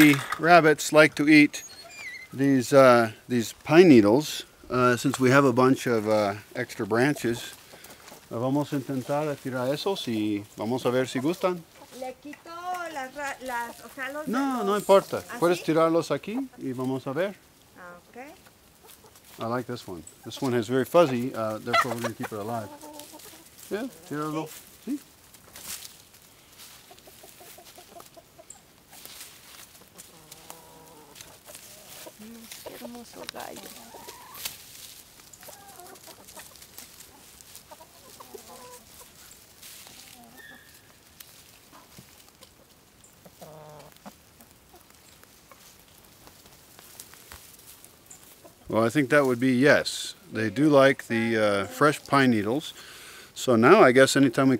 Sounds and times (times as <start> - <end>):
Cluck: 20.2 - 24.3, 26.7 - 34.5, 35.4 - 40.8, 41.6 - 45.7.